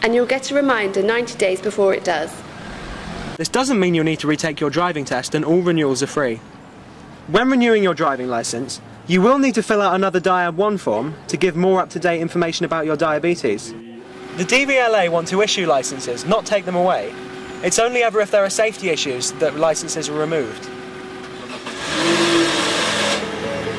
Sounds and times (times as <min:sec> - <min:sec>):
Outside, urban or manmade: 0:00.0 - 0:23.7
Car: 0:01.8 - 0:23.7
Speech: 0:07.3 - 0:20.7.